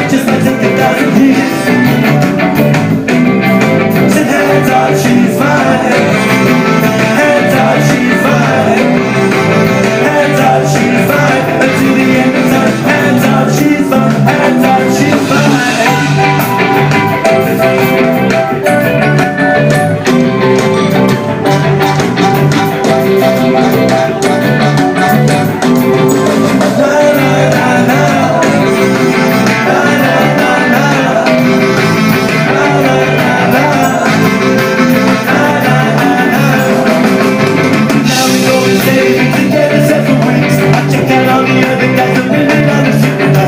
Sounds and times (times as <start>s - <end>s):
Ska: 0.0s - 43.4s.